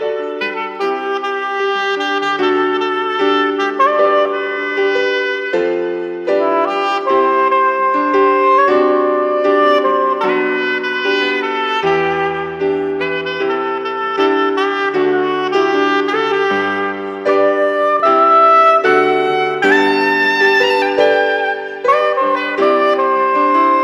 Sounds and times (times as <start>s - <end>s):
Tender music: 2.0s - 23.8s.